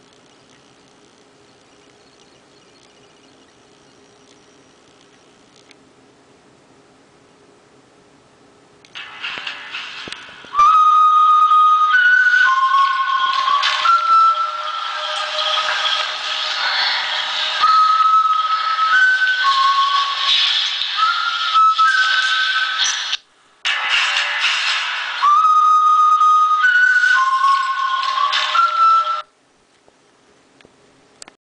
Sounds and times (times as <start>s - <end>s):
Music: 9.0s - 29.3s
Ringtone: 9.0s - 29.3s.